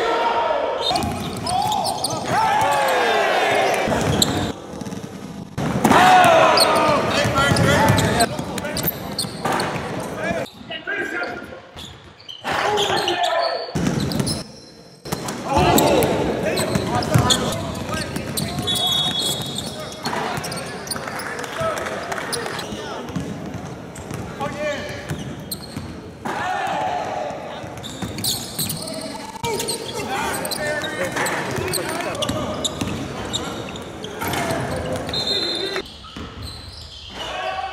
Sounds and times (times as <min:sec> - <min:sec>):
Speech: 0:12.4 - 0:13.7, 0:15.4 - 0:23.1.